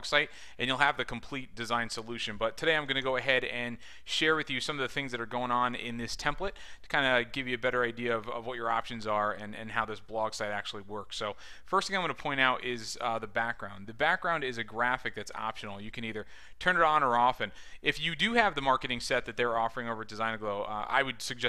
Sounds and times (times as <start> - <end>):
Speech: 0.0 - 21.4.